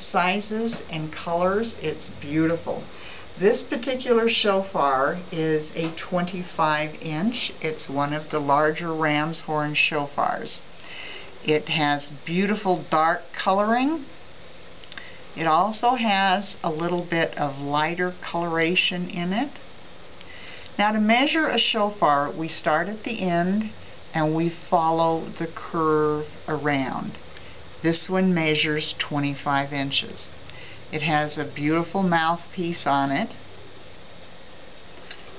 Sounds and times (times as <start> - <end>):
Speech: 0.0 - 10.7, 11.4 - 14.1, 15.4 - 19.6, 20.8 - 27.2, 27.8 - 33.4.